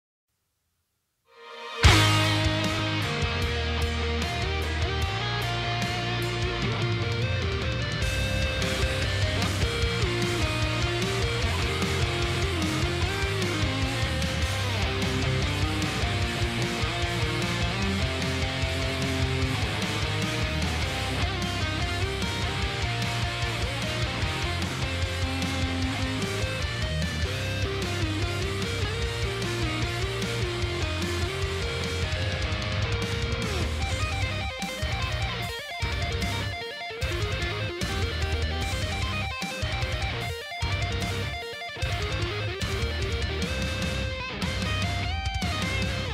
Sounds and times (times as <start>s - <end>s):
Electric guitar: 1.3s - 46.1s
Strum: 1.4s - 46.1s.